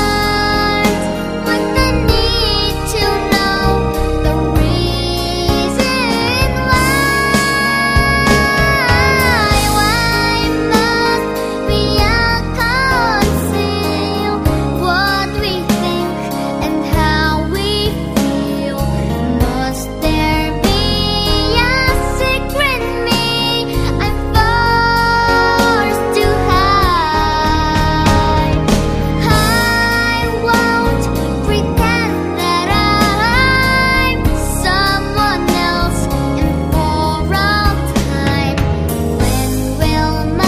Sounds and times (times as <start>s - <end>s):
Music: 0.0s - 40.4s.